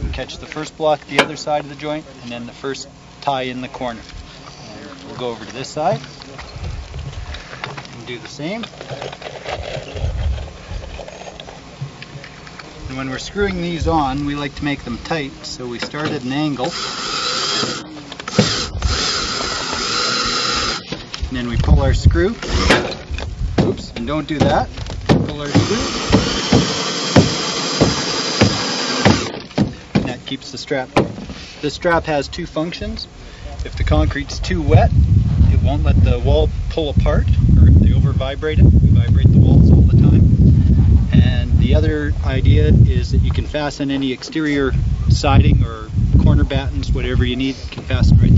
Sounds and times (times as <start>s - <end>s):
Speech: 0.0s - 6.5s, 7.9s - 8.7s, 12.2s - 16.7s, 21.3s - 22.4s, 23.6s - 25.9s, 30.0s - 31.0s, 31.6s - 34.9s, 35.5s - 40.2s, 41.1s - 48.3s.